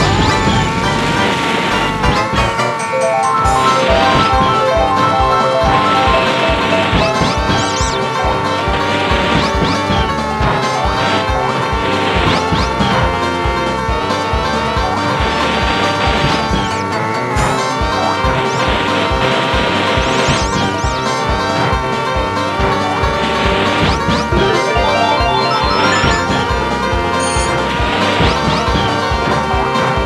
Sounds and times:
Music: 0.0 - 30.0.

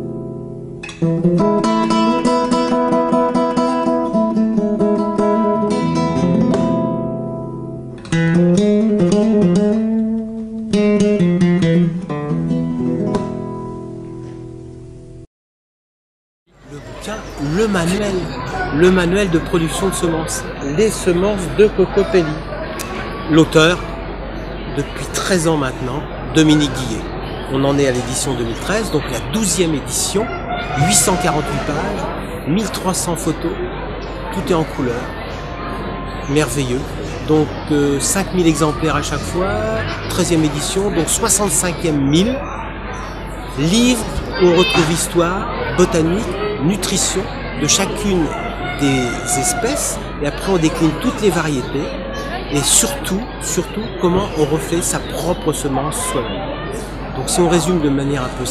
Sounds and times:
Music: 0.0 - 15.3.

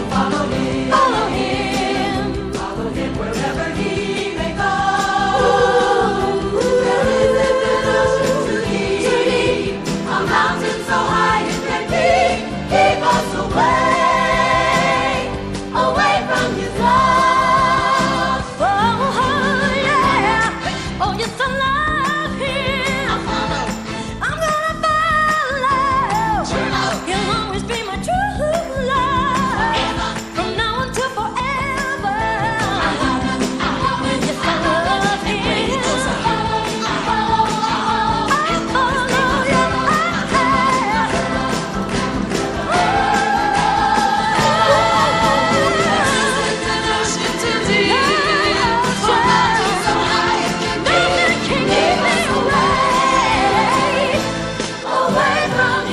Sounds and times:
Choir: 0.0 - 21.0, 22.4 - 24.0, 26.0 - 27.4, 29.2 - 30.6, 31.4 - 55.9.

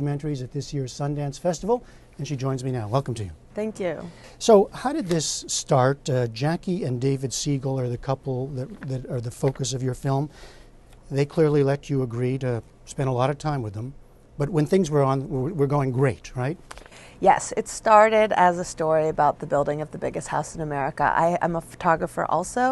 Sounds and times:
Speech: 11.1 - 16.6.

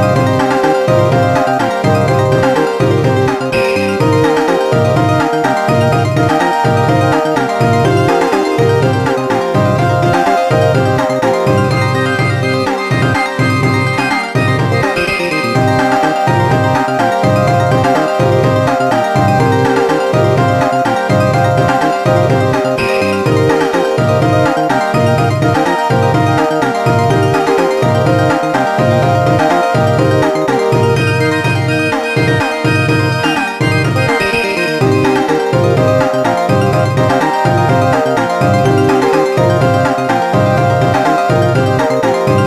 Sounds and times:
Music: 0.0 - 42.4.

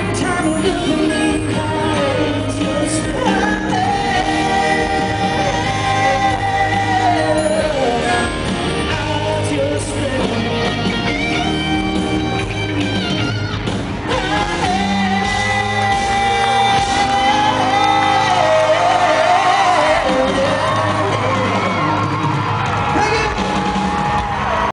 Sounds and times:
Guitar: 0.0 - 24.7.

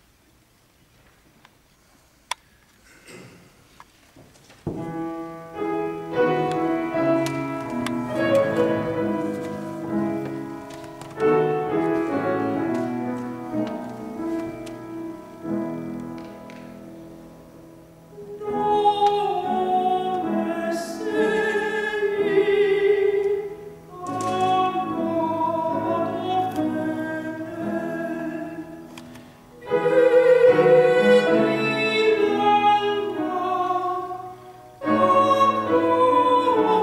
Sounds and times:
Music: 4.7 - 36.8.

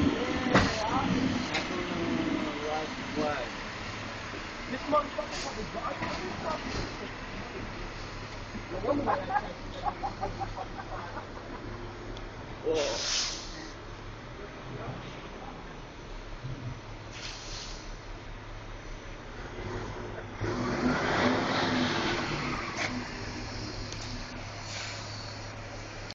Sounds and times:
Vehicle: 0.0 - 26.1.

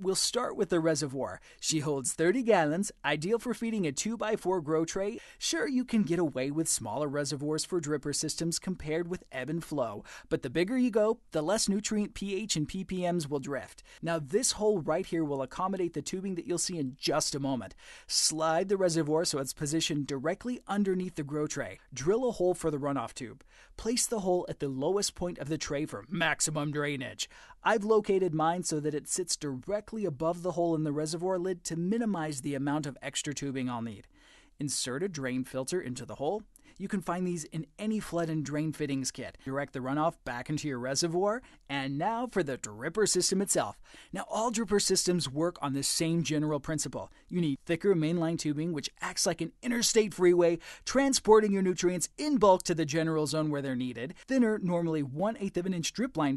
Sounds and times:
Speech: 0.0 - 56.3.

